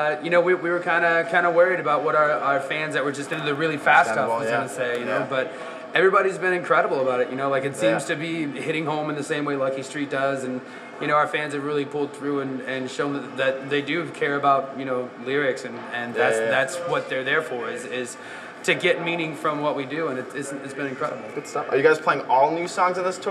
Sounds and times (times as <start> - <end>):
Speech: 0.0 - 23.3.